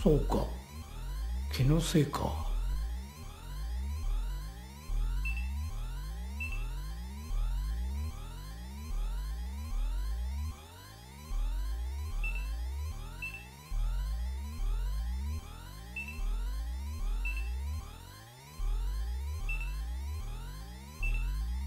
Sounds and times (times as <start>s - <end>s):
Music: 0.0s - 21.6s.